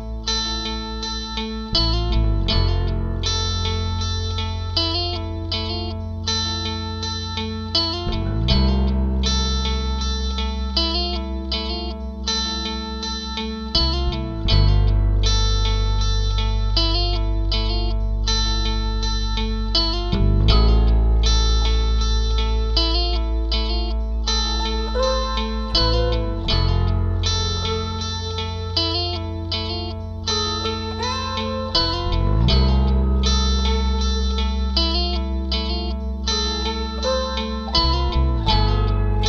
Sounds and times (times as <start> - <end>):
Music: 0.0 - 39.2.